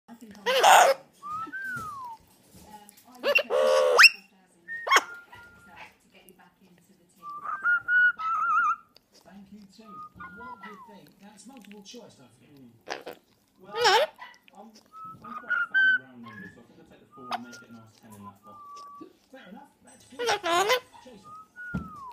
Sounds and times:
Inside, small room: 0.1s - 22.1s
Domestic animals, pets: 0.4s - 2.3s, 2.9s - 6.0s, 7.3s - 11.8s, 12.9s - 16.6s, 17.3s - 19.1s, 20.2s - 21.2s
Bird: 3.2s - 4.3s, 15.0s - 16.6s, 17.2s - 19.1s.

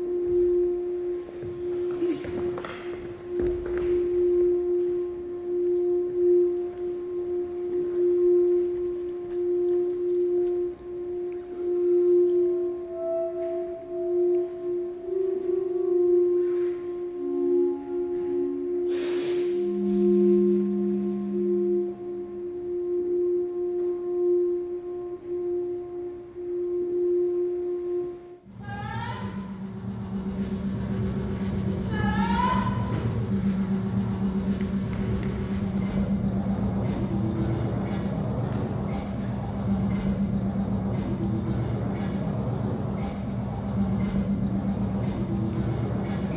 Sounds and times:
Singing bowl: 0.0s - 28.5s.

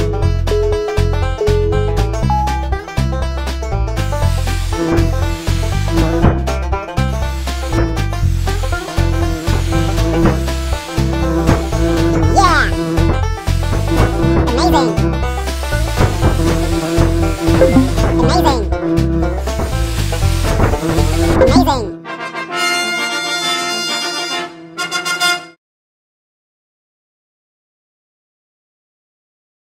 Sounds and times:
Music: 0.0s - 25.6s
Speech: 12.2s - 12.8s, 14.4s - 15.0s, 18.0s - 18.8s, 21.4s - 22.0s.

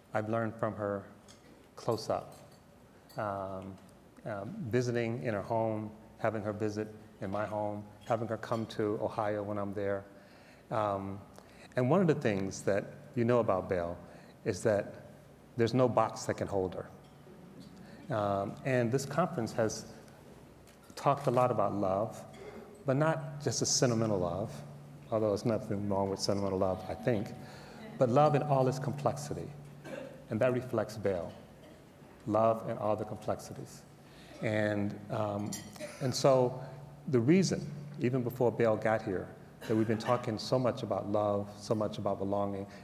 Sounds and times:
Speech: 0.2s - 1.1s, 1.8s - 2.4s, 3.2s - 10.1s, 10.7s - 11.2s, 11.8s - 15.0s, 15.6s - 16.9s, 18.1s - 19.9s, 21.0s - 22.3s, 22.9s - 29.6s, 30.3s - 31.4s, 32.3s - 42.7s.

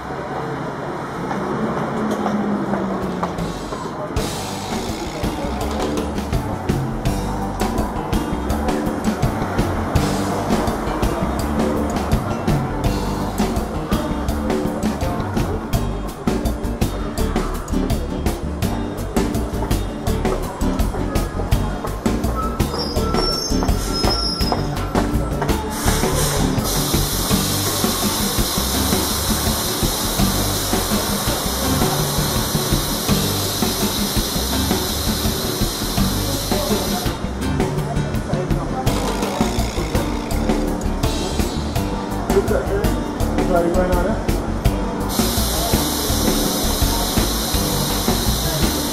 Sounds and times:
Music: 3.0s - 48.9s
Speech: 19.2s - 26.6s, 36.1s - 40.3s, 42.2s - 44.5s, 45.1s - 48.9s.

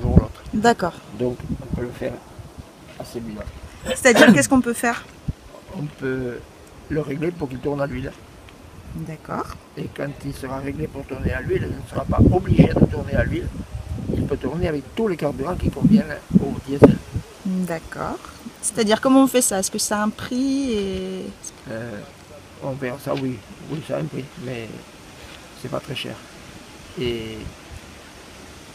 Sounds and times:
Speech: 3.0s - 5.0s, 5.6s - 8.2s, 9.0s - 13.5s, 14.2s - 24.8s, 27.0s - 27.5s.

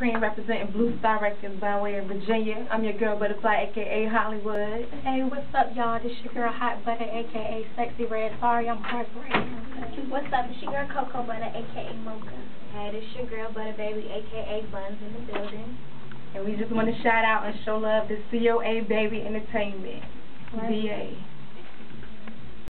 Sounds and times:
Speech: 0.0s - 15.8s, 16.4s - 21.3s.

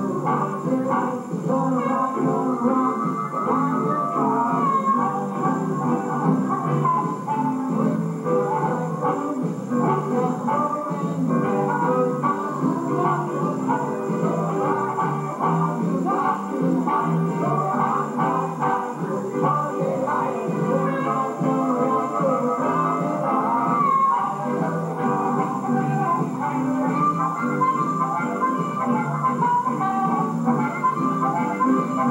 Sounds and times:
Blues: 0.0s - 32.1s.

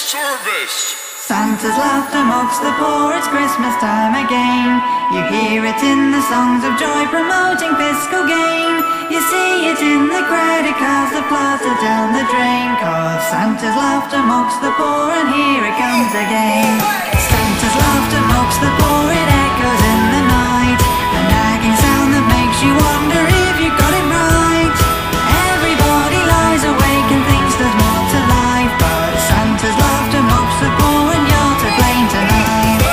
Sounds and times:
Music: 0.1s - 32.9s.

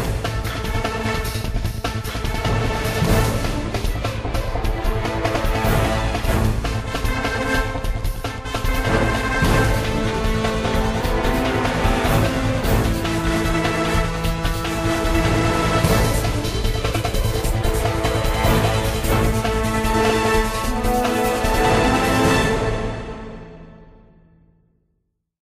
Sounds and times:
Exciting music: 0.0s - 24.4s.

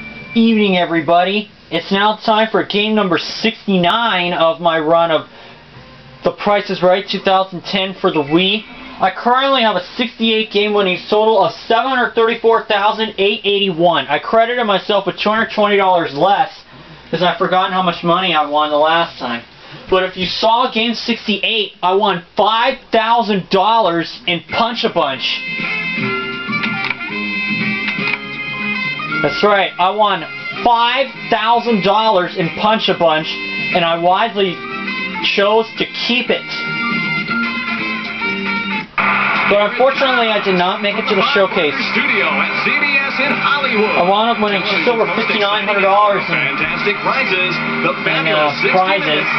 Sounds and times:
Music: 0.0s - 0.7s, 24.5s - 49.3s
Speech: 0.4s - 5.3s, 6.2s - 25.4s, 29.2s - 34.6s, 35.2s - 36.6s, 39.5s - 49.3s.

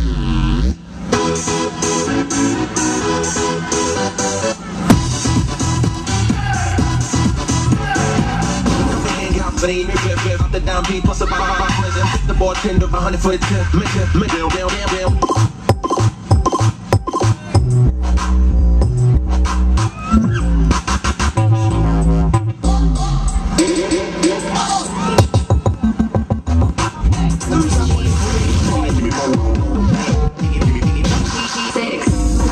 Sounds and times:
Music: 0.0s - 32.5s.

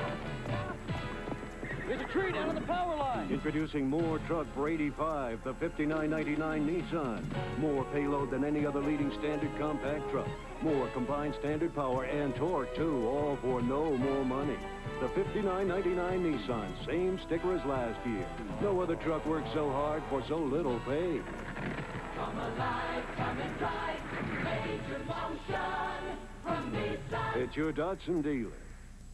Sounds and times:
Music: 0.0s - 28.2s
Speech: 1.9s - 21.2s, 27.4s - 28.6s.

